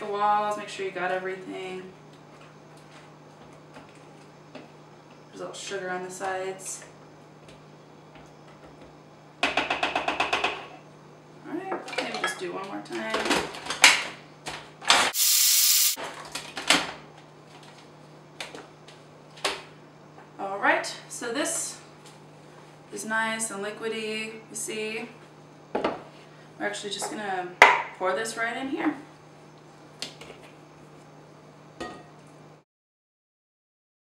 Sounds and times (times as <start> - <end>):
Speech: 0.0 - 2.0, 5.3 - 6.9, 11.4 - 13.3, 20.4 - 21.8, 22.9 - 25.2, 26.6 - 29.1.